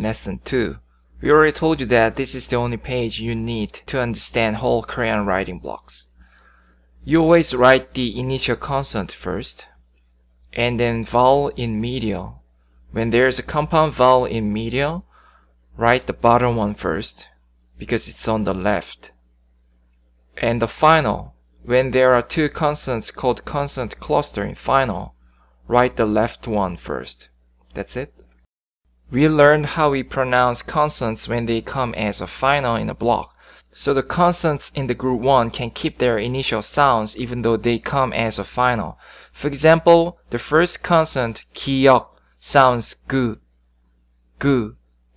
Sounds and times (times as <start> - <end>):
Speech: 0.0 - 6.1, 7.0 - 9.8, 10.5 - 15.1, 15.8 - 19.2, 20.4 - 28.2, 29.1 - 43.4, 44.4 - 44.8.